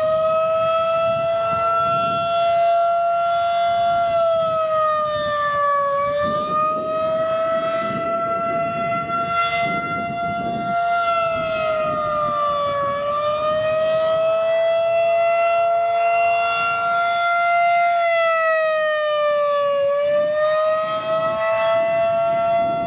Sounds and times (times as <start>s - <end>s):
Civil defense siren: 0.0s - 22.8s.